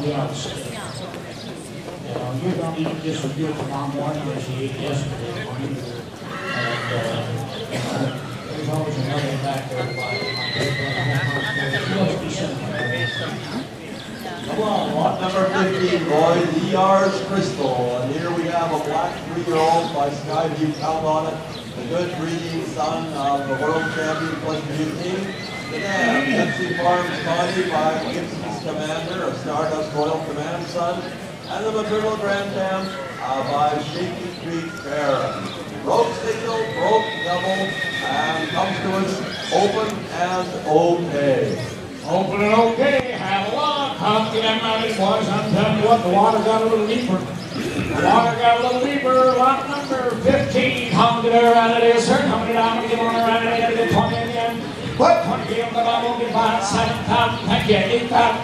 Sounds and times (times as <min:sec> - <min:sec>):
Speech: 0:00.0 - 0:58.4.